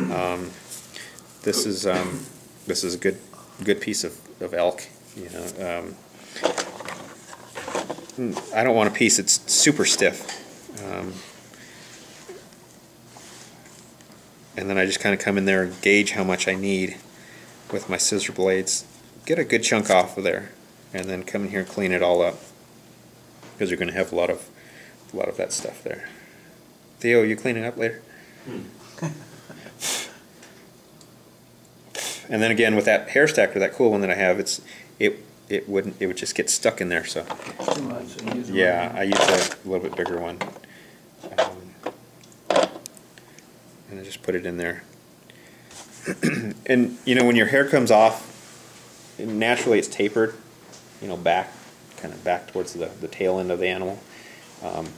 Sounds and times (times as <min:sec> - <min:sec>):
Speech: 0:00.0 - 0:00.6, 0:01.4 - 0:06.0, 0:08.2 - 0:11.3, 0:14.6 - 0:17.0, 0:17.7 - 0:22.5, 0:23.6 - 0:24.5, 0:25.1 - 0:26.1, 0:27.0 - 0:28.1, 0:32.3 - 0:40.5, 0:41.3 - 0:41.8, 0:43.9 - 0:44.9, 0:46.6 - 0:48.3, 0:49.2 - 0:50.4, 0:51.0 - 0:54.0, 0:54.6 - 0:54.9.